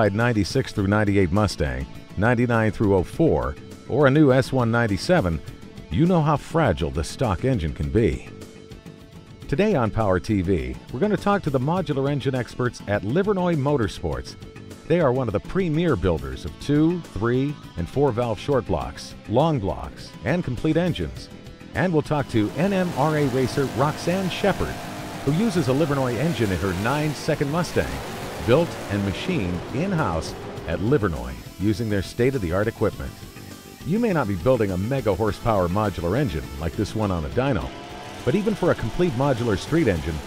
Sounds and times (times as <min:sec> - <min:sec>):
Speech: 0:00.0 - 0:08.3, 0:09.5 - 0:33.2, 0:33.9 - 0:40.2
Music: 0:00.0 - 0:40.2
Car: 0:22.2 - 0:31.6, 0:36.2 - 0:40.2
Medium engine (mid frequency): 0:22.2 - 0:32.2, 0:35.6 - 0:40.2
Accelerating, revving, vroom: 0:22.4 - 0:30.9, 0:37.6 - 0:40.2.